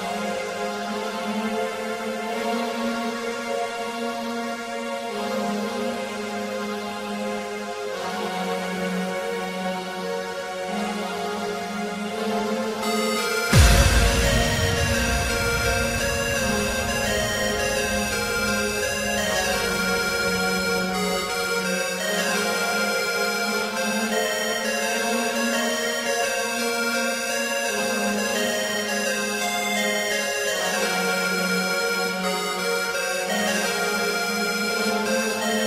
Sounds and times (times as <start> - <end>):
Electronic music: 12.8 - 35.6.